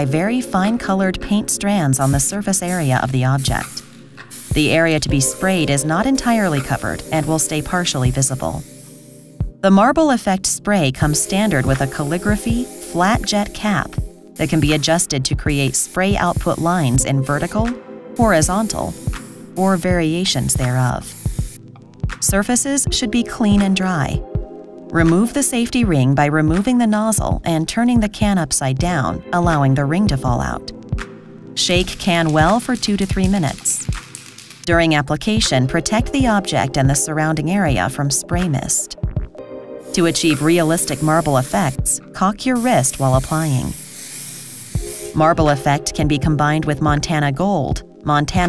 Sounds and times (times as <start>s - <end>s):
Speech: 0.0s - 3.8s, 4.6s - 8.6s, 9.6s - 19.0s, 19.6s - 21.1s, 22.2s - 24.2s, 24.9s - 30.7s, 31.6s - 33.8s, 34.7s - 39.0s, 40.0s - 43.8s, 45.2s - 48.4s
Music: 0.0s - 48.4s
Spray: 1.9s - 9.4s, 11.0s - 21.6s, 31.6s - 34.6s, 39.9s - 45.8s.